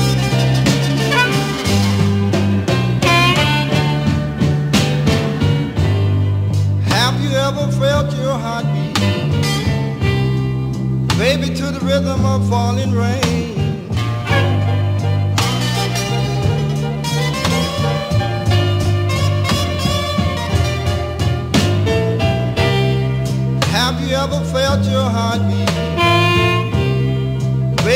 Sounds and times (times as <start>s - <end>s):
Blues: 0.0s - 27.9s.